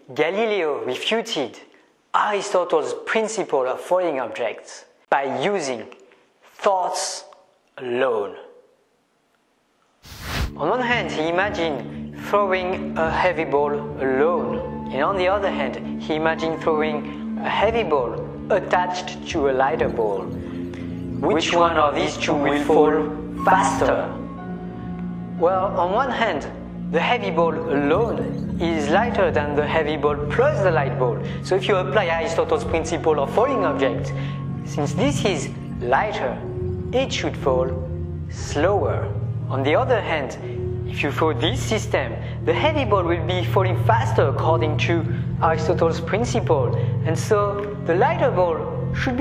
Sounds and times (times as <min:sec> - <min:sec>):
Speech: 0:00.0 - 0:08.6, 0:10.6 - 0:20.3, 0:21.2 - 0:24.2, 0:25.4 - 0:34.1, 0:34.7 - 0:36.4, 0:37.0 - 0:49.2
Music: 0:10.1 - 0:49.2.